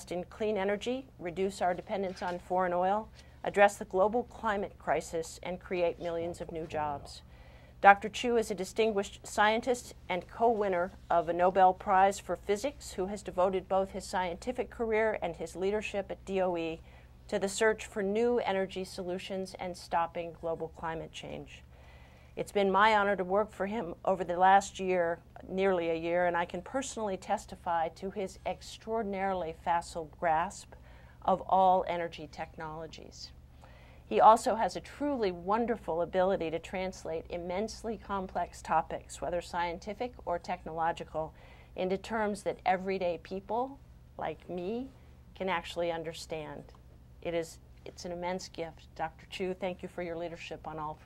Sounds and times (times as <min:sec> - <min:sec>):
Speech: 0:00.0 - 0:07.2, 0:07.8 - 0:21.6, 0:22.4 - 0:33.4, 0:34.1 - 0:51.0.